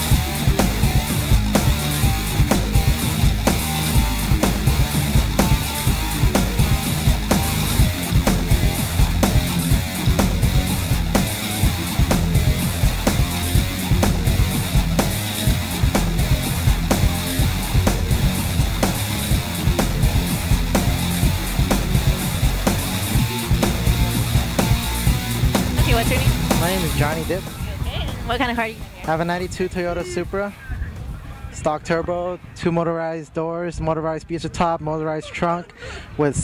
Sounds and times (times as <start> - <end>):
Music: 0.0 - 32.7.